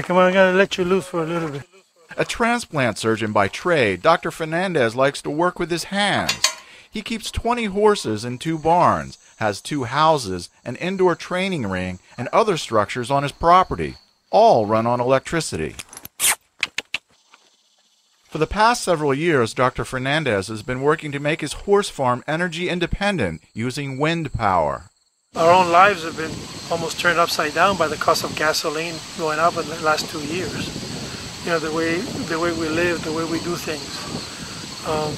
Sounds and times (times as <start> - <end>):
Speech: 0.0 - 15.8, 18.3 - 30.7, 31.4 - 34.2, 34.8 - 35.1
Rustling leaves: 25.4 - 35.1
Wind noise (microphone): 25.4 - 35.1.